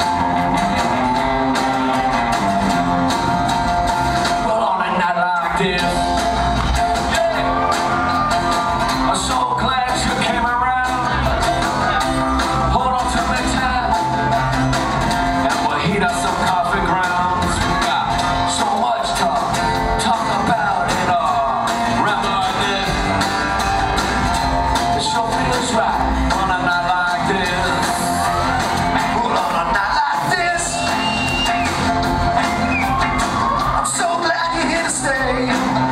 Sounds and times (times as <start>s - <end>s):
Independent music: 0.0s - 35.9s.